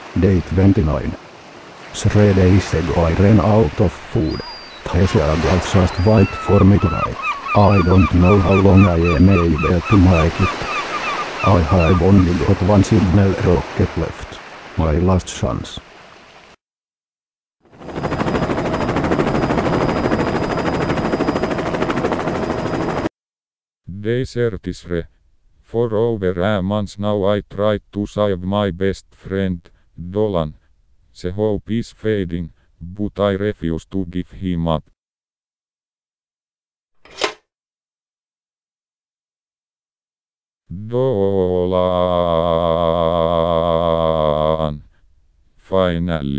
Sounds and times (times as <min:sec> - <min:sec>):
Speech: 0:00.2 - 0:01.2, 0:02.0 - 0:10.5, 0:11.5 - 0:15.8, 0:23.9 - 0:25.1, 0:25.7 - 0:30.6, 0:31.2 - 0:34.9, 0:40.7 - 0:44.9, 0:45.6 - 0:46.3.